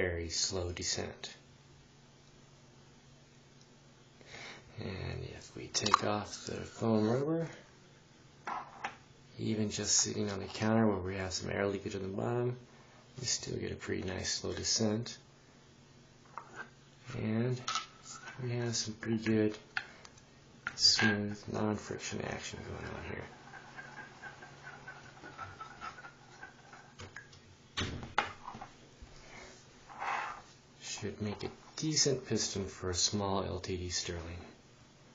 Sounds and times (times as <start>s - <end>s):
Speech: 0.0s - 1.4s, 4.7s - 7.7s, 9.4s - 12.6s, 13.2s - 15.2s, 17.1s - 19.6s, 20.7s - 23.3s, 30.8s - 34.6s.